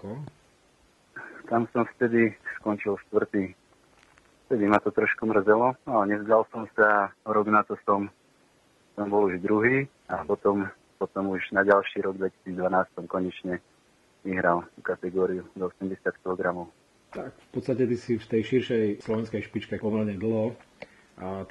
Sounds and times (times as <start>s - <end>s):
Speech: 0.0s - 0.3s, 1.2s - 3.6s, 4.5s - 8.1s, 9.0s - 13.6s, 14.3s - 20.6s, 21.2s - 21.5s.